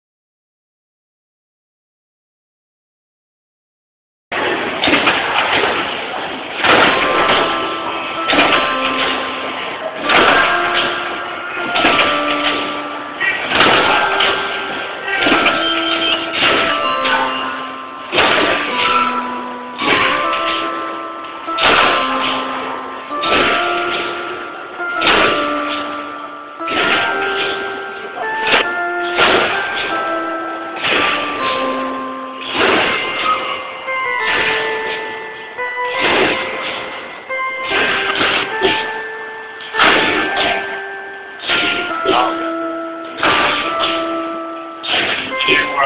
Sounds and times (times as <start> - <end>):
Music: 6.6 - 45.8.